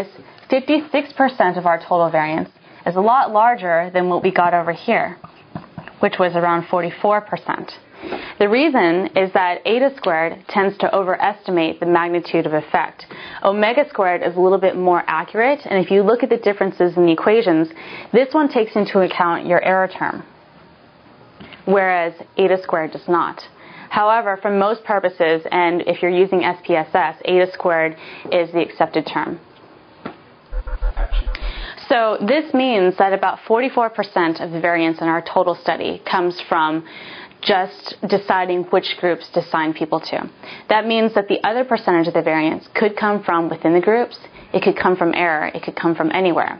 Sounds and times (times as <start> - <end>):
Speech: 0.0 - 5.2, 6.0 - 7.8, 8.4 - 20.3, 21.6 - 29.4, 31.4 - 36.8, 37.4 - 46.5.